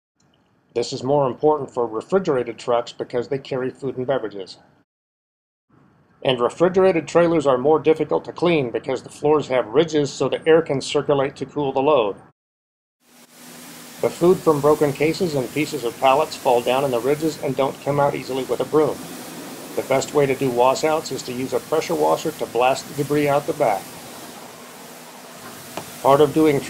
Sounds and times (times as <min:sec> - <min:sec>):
Speech: 0:00.8 - 0:04.6, 0:06.2 - 0:12.3, 0:14.0 - 0:19.0, 0:19.8 - 0:23.9, 0:26.0 - 0:26.7.